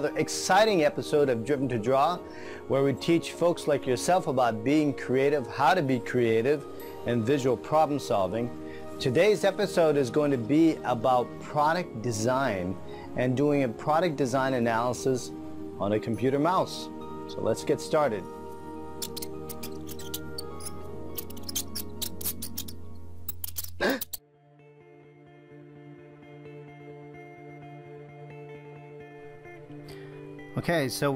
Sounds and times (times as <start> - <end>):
Speech: 0.0 - 18.3, 30.6 - 31.1
Music: 0.0 - 31.1.